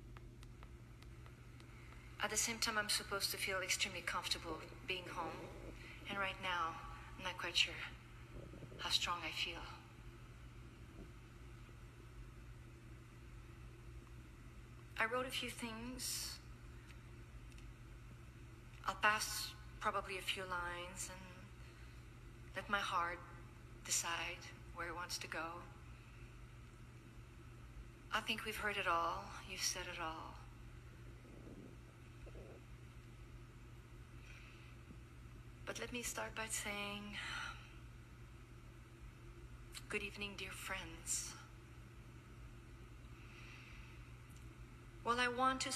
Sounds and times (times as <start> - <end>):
Narration, monologue: 0.1 - 45.7
Female speech, woman speaking: 2.2 - 8.0, 8.7 - 9.9, 15.0 - 16.5, 18.8 - 21.5, 22.6 - 25.8, 28.1 - 30.5, 35.7 - 37.4, 39.8 - 41.5, 45.0 - 45.7.